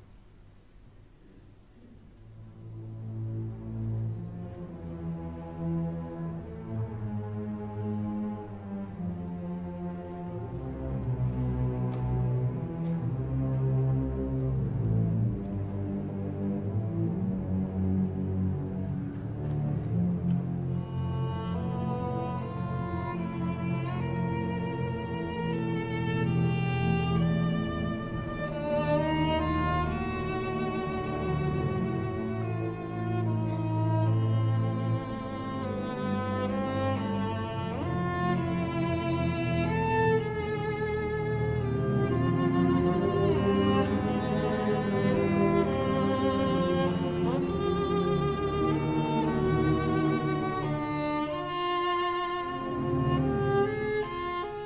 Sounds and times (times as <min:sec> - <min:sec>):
Violin, fiddle: 0:02.5 - 0:54.6.